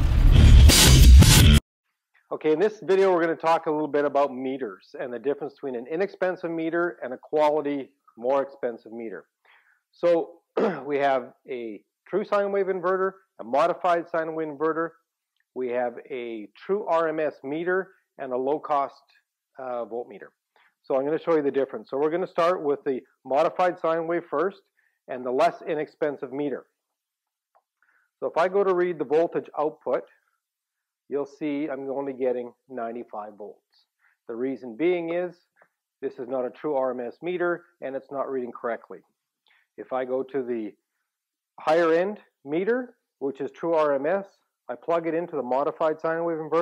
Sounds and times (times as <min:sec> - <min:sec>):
Speech: 0:02.3 - 0:09.3, 0:10.0 - 0:15.0, 0:15.6 - 0:26.8, 0:28.2 - 0:30.1, 0:31.1 - 0:39.1, 0:39.8 - 0:40.8, 0:41.6 - 0:46.6.